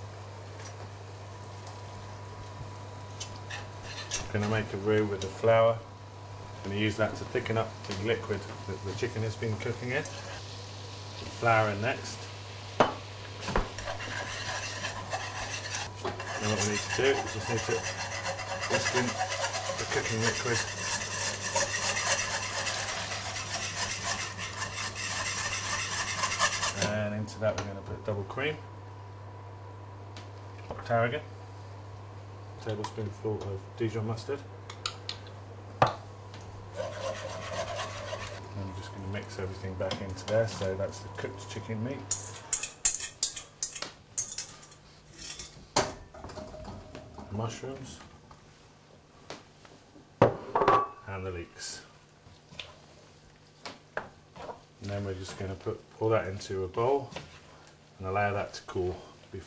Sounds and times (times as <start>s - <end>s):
Stir: 13.8s - 26.9s, 36.7s - 38.4s.